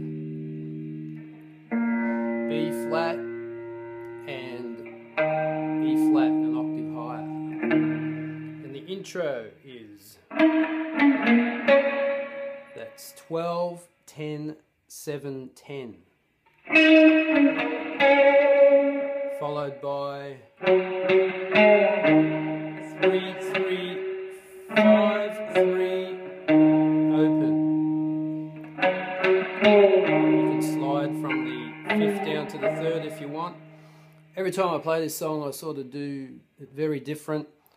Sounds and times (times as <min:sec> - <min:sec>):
Steel guitar, slide guitar: 0:00.0 - 0:08.8, 0:10.3 - 0:13.0, 0:16.6 - 0:19.8, 0:20.5 - 0:34.3
Tapping (guitar technique): 0:00.0 - 0:08.8, 0:10.3 - 0:12.9, 0:16.5 - 0:19.8, 0:20.5 - 0:34.4
Speech: 0:02.5 - 0:03.2, 0:04.3 - 0:04.8, 0:05.8 - 0:07.4, 0:08.6 - 0:10.2, 0:12.8 - 0:16.1, 0:19.4 - 0:20.5, 0:23.0 - 0:24.0, 0:24.8 - 0:26.2, 0:27.1 - 0:27.6, 0:30.4 - 0:33.6, 0:34.4 - 0:37.6.